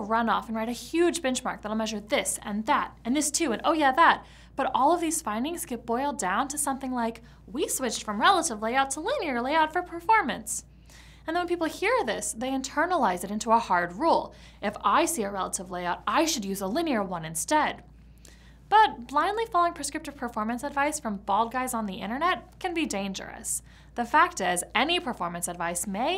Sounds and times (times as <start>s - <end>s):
Speech: 0.0s - 10.7s, 11.3s - 17.9s, 18.7s - 26.1s.